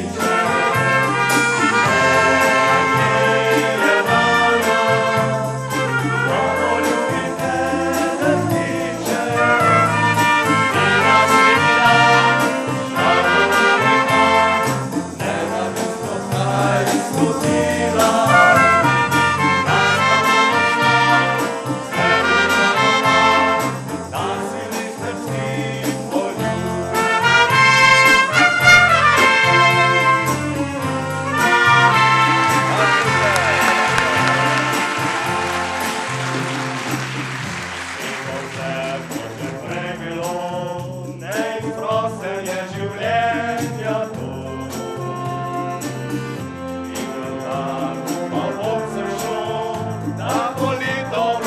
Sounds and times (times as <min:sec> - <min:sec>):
Wind instrument, woodwind instrument: 0:00.0 - 0:24.3, 0:25.0 - 0:38.9, 0:43.0 - 0:50.3
Orchestra: 0:00.0 - 0:51.4.